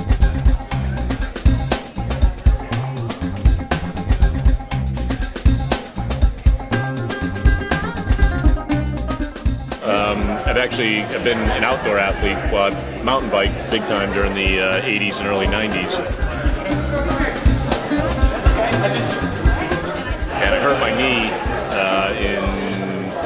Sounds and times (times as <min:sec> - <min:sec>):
Music: 0:00.0 - 0:23.2
Speech: 0:09.8 - 0:23.2.